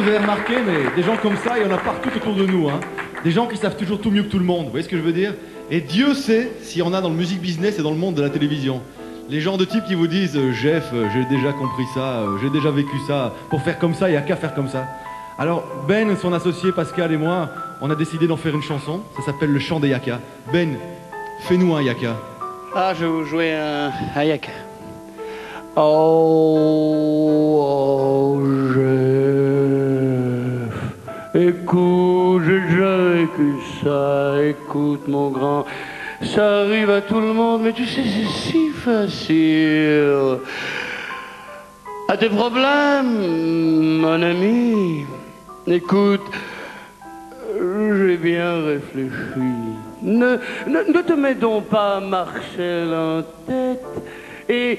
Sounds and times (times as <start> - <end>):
Speech: 0.0 - 20.8, 21.4 - 22.2, 22.8 - 24.6, 36.3 - 40.4, 42.1 - 46.3, 47.4 - 53.8, 54.5 - 54.7
Music: 0.0 - 54.7.